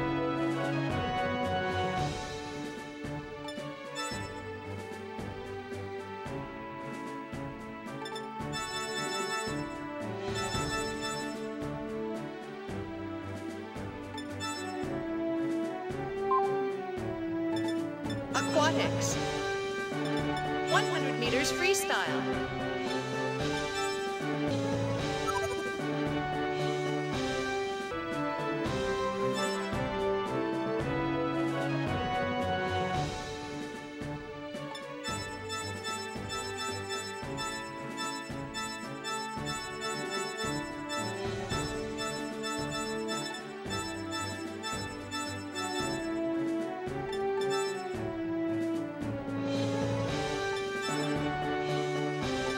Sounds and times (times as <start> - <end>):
Music: 0.0 - 52.5
Speech: 18.4 - 19.2, 20.7 - 22.4.